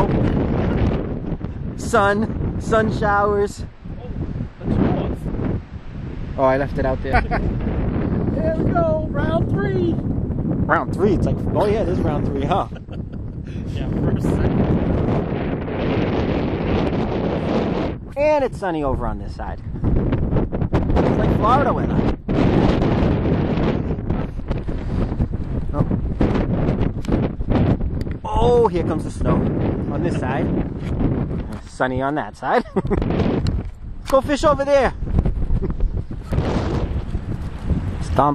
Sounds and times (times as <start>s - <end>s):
Speech: 6.4s - 7.2s, 8.4s - 10.0s, 10.7s - 12.8s, 13.7s - 14.6s, 18.1s - 19.6s, 21.2s - 22.0s, 28.3s - 30.5s, 31.6s - 32.7s, 34.1s - 35.0s.